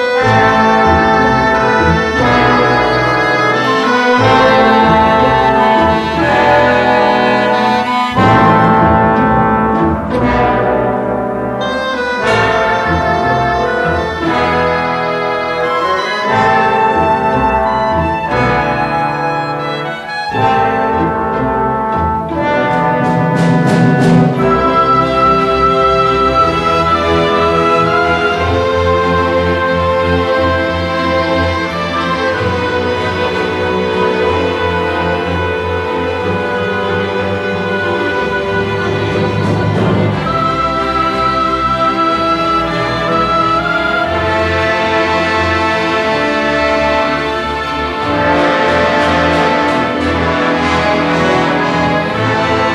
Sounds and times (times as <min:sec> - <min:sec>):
Music: 0:00.0 - 0:52.7.